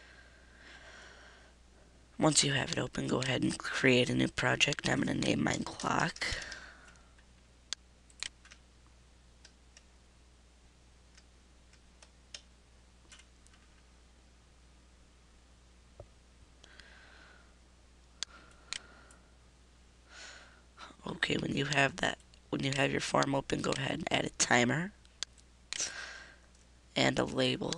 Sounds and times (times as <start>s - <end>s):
Speech: 2.2s - 6.4s, 20.8s - 25.0s, 27.0s - 27.7s.